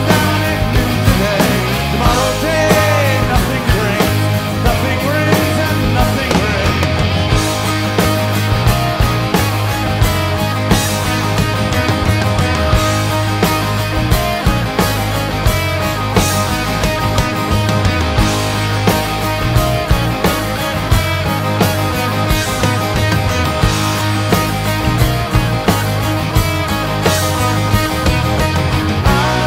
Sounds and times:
Singing: 0:00.0 - 0:07.1, 0:29.0 - 0:29.4
Guitar: 0:00.0 - 0:29.4.

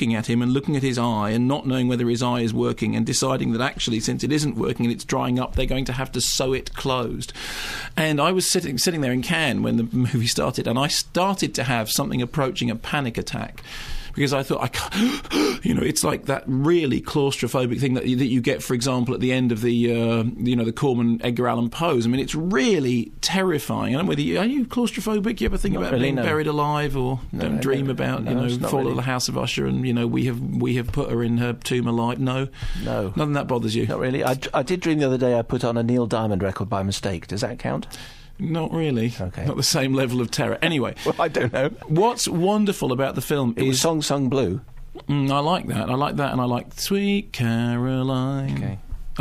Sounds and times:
Speech: 0:00.0 - 0:07.3, 0:08.0 - 0:13.6, 0:14.2 - 0:14.9, 0:15.6 - 0:49.2.

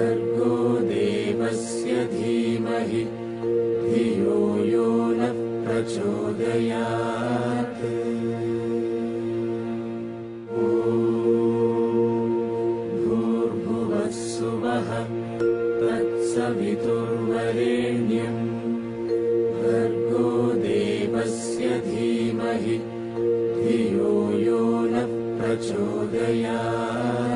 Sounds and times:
Mantra: 0:00.0 - 0:15.2, 0:15.8 - 0:18.9, 0:19.5 - 0:27.3.

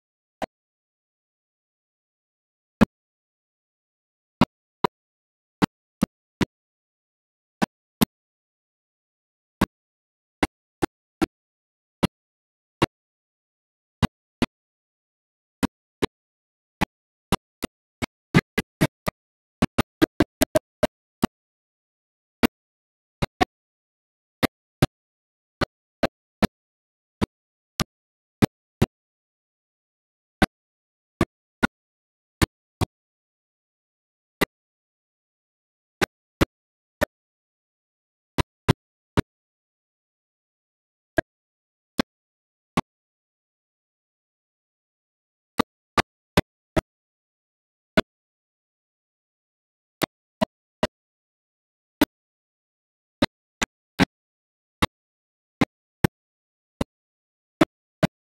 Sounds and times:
Music: 0:00.0 - 0:13.3, 0:13.9 - 0:21.7, 0:22.4 - 0:29.6.

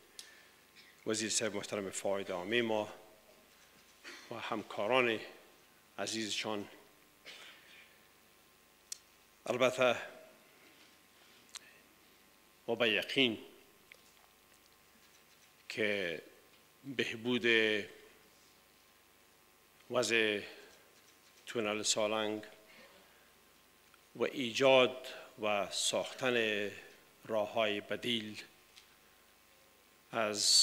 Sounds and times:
Narration, monologue: 0:00.0 - 0:30.6
Male speech, man speaking: 0:01.1 - 0:03.0, 0:04.3 - 0:05.4, 0:06.0 - 0:06.8, 0:09.5 - 0:10.2, 0:12.7 - 0:13.5, 0:15.7 - 0:16.3, 0:16.9 - 0:18.0, 0:19.9 - 0:20.6, 0:21.5 - 0:22.6, 0:24.2 - 0:28.5, 0:30.1 - 0:30.6.

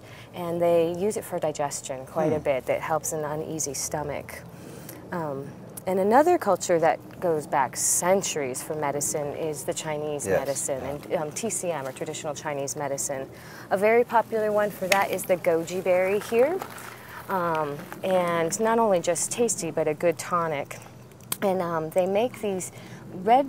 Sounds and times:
Female speech, woman speaking: 0:00.4 - 0:04.4, 0:05.1 - 0:20.8, 0:21.4 - 0:23.4.

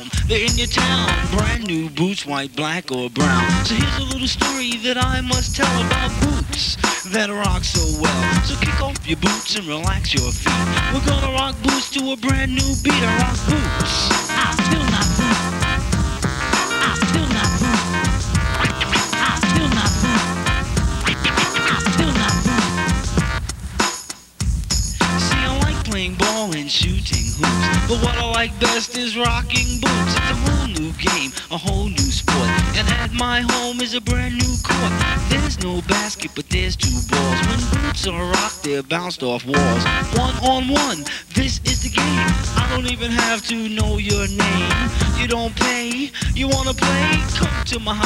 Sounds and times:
Punk rock: 0:00.0 - 0:01.6, 0:03.2 - 0:38.8, 0:39.6 - 0:48.0
Rock and roll: 0:00.0 - 0:01.8, 0:03.2 - 0:48.0.

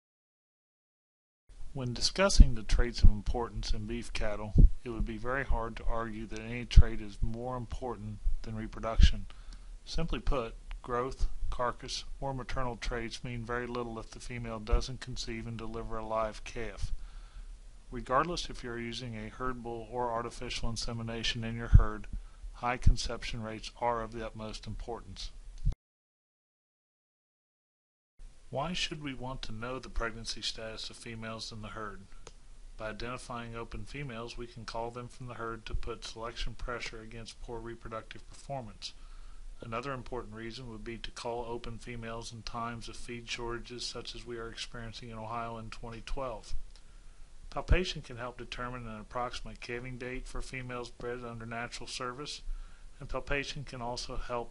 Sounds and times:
Speech: 0:01.7 - 0:17.0, 0:17.9 - 0:25.4, 0:28.5 - 0:32.1, 0:32.8 - 0:39.0, 0:39.6 - 0:46.6, 0:47.5 - 0:54.5.

